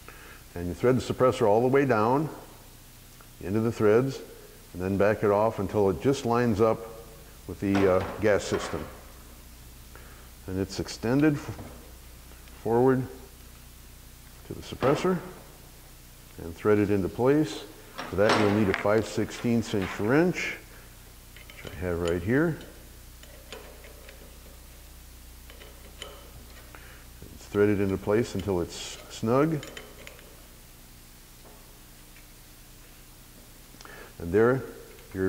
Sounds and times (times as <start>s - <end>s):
Speech: 0.6s - 2.4s, 3.4s - 9.0s, 10.5s - 11.8s, 12.6s - 13.3s, 14.4s - 15.4s, 16.4s - 20.7s, 21.6s - 22.7s, 27.4s - 29.7s, 34.2s - 35.2s.